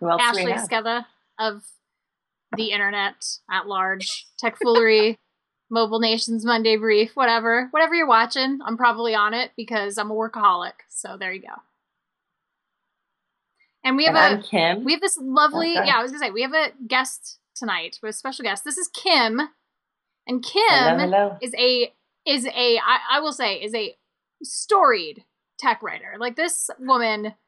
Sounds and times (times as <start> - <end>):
Speech: 0.0 - 1.7, 2.6 - 11.6, 13.9 - 19.5, 20.3 - 27.3.